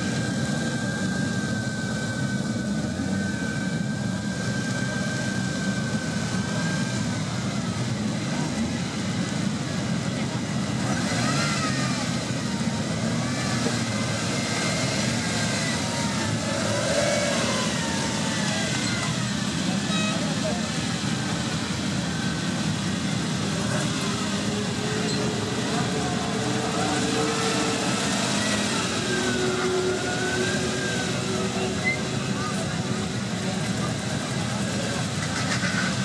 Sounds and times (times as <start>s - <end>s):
Speech: 18.4s - 21.4s, 23.5s - 36.0s.